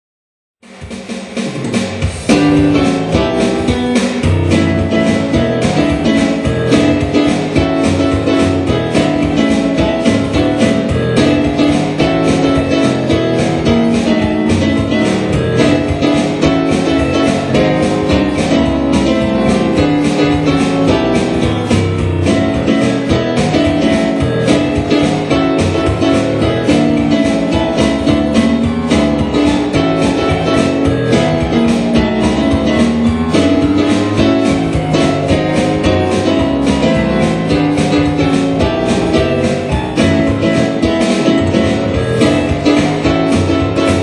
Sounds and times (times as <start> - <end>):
Music: 0.6 - 44.0.